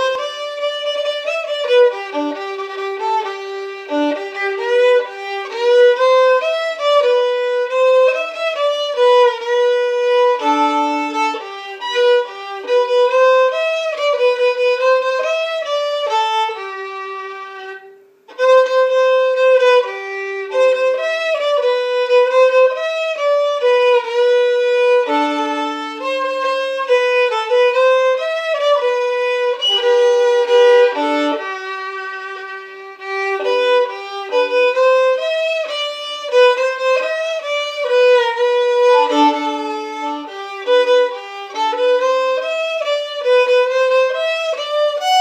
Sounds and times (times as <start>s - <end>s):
Violin, fiddle: 0.0s - 45.2s.